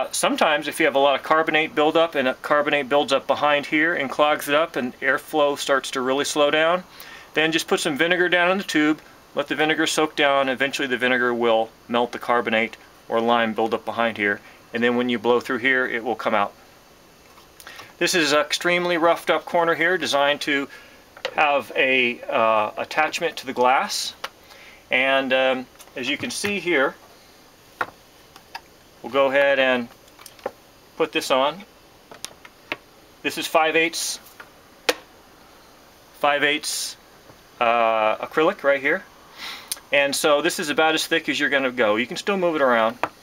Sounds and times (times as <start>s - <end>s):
Speech: 0.0s - 16.6s, 18.0s - 20.7s, 21.3s - 24.2s, 24.9s - 27.0s, 29.0s - 29.9s, 31.0s - 31.7s, 33.2s - 34.3s, 36.2s - 37.0s, 37.6s - 39.1s, 39.9s - 43.0s
Inside, small room: 0.0s - 43.2s.